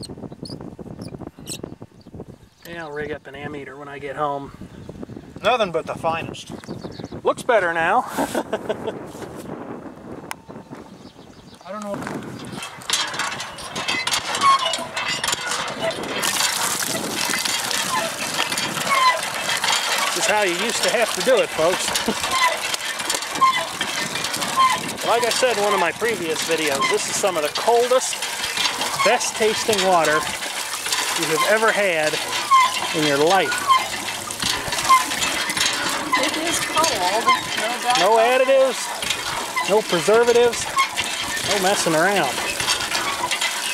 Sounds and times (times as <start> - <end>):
Water: 10.2 - 43.7
Water tap, faucet: 16.2 - 43.7.